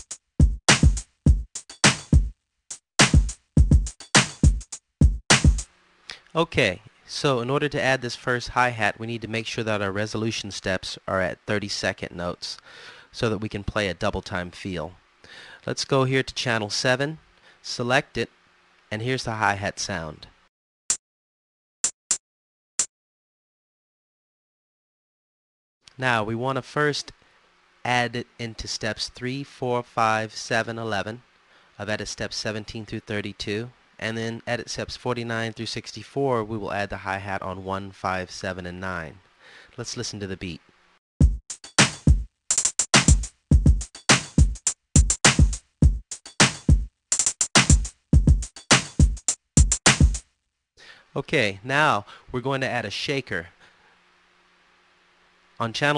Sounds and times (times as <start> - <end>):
Speech: 6.1 - 15.0, 15.6 - 18.3, 18.9 - 20.4, 25.9 - 27.2, 27.8 - 39.2, 39.8 - 40.6, 51.1 - 53.6, 55.6 - 55.9.